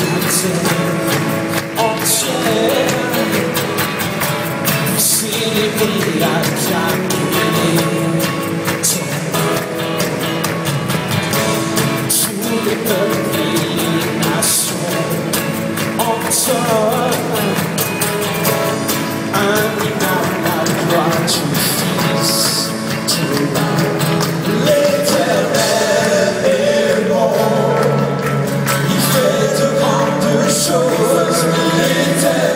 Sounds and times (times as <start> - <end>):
Music: 0.0 - 32.5.